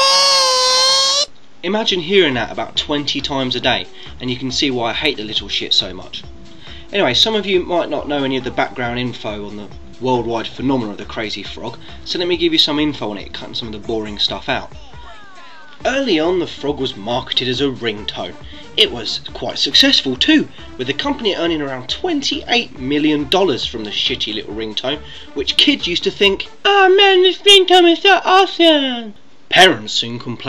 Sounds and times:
Speech: 0:01.6 - 0:06.3, 0:06.9 - 0:30.4
Music: 0:01.9 - 0:28.5.

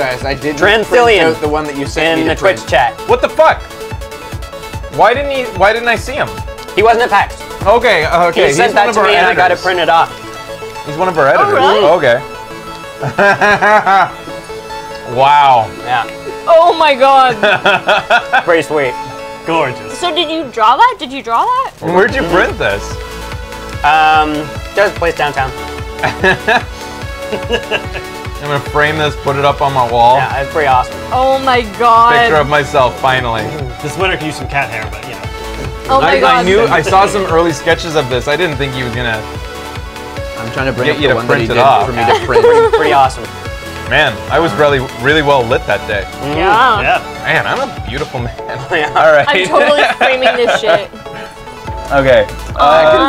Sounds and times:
Music: 0:00.0 - 0:53.0.

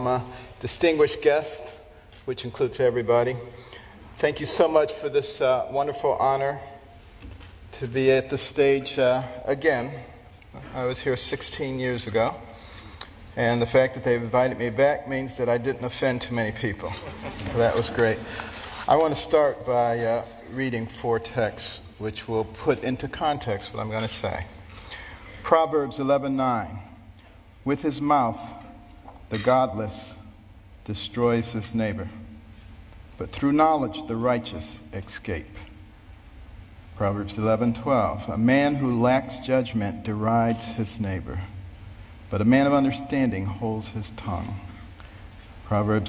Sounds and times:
Male speech, man speaking: 0:00.0 - 0:03.5, 0:04.2 - 0:06.8, 0:07.7 - 0:12.4, 0:13.4 - 0:18.3, 0:18.9 - 0:24.5, 0:25.4 - 0:26.9, 0:27.6 - 0:28.7, 0:29.3 - 0:30.3, 0:30.9 - 0:32.2, 0:33.2 - 0:35.6, 0:37.0 - 0:41.6, 0:42.3 - 0:44.8, 0:45.7 - 0:46.0
Narration, monologue: 0:00.0 - 0:46.0.

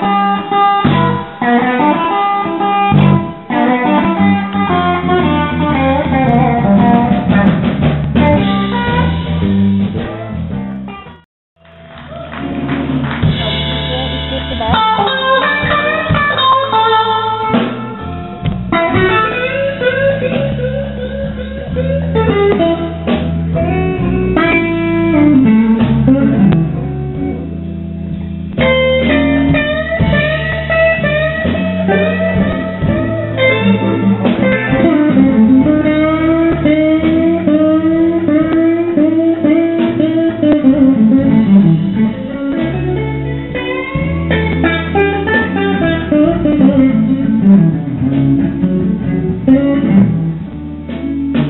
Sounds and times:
Music: 0:00.0 - 0:51.5.

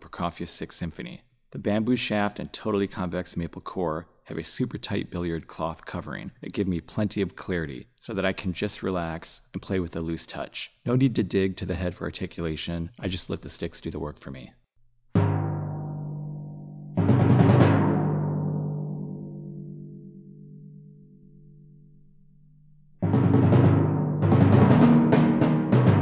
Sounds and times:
Speech: 0:00.0 - 0:14.6.

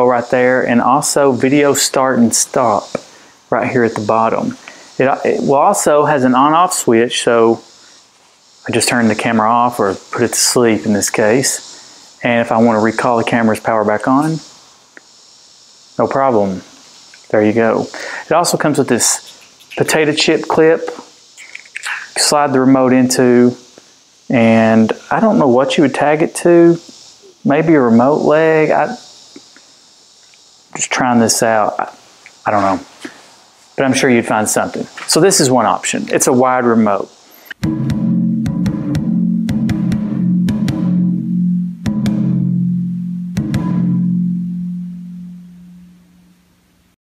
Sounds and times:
Percussion: 0:18.5 - 0:22.4, 0:37.3 - 0:42.5, 0:43.3 - 0:45.9.

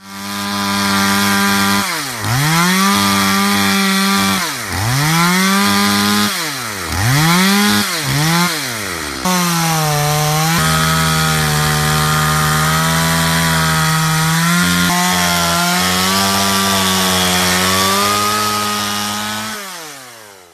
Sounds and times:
Sawing: 0:00.0 - 0:20.5
Wood: 0:00.1 - 0:20.5.

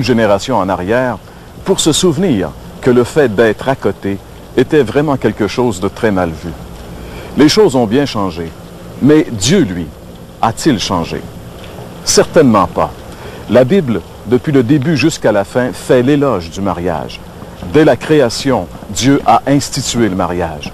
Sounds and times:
Speech: 0:00.0 - 0:06.6, 0:07.4 - 0:11.3, 0:12.0 - 0:20.7.

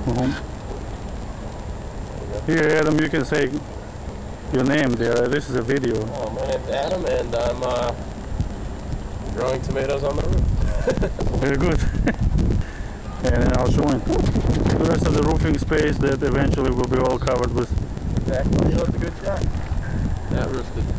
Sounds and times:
Speech: 0:00.0 - 0:00.4, 0:04.5 - 0:08.0, 0:09.3 - 0:10.4, 0:13.2 - 0:17.7, 0:18.3 - 0:19.4
Outside, urban or manmade: 0:00.0 - 0:20.9.

